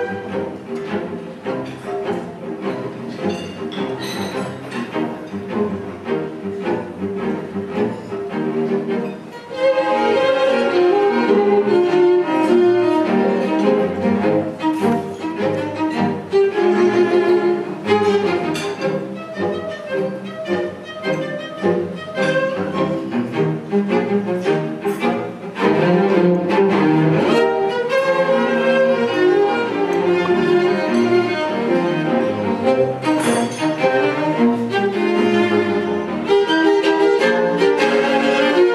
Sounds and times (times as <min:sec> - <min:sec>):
Cello: 0:00.0 - 0:38.7.